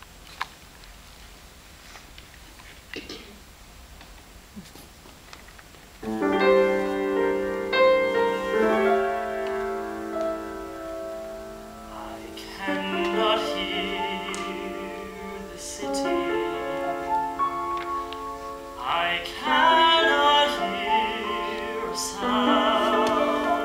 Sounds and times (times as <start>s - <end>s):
Piano: 6.0s - 23.6s
Singing: 8.2s - 9.7s, 11.9s - 17.6s, 18.8s - 23.6s.